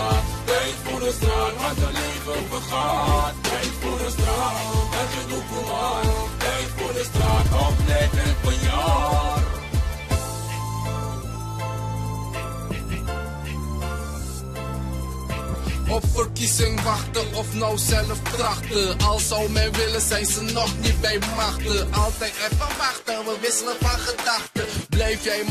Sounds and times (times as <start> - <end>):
Music: 0.0 - 25.5.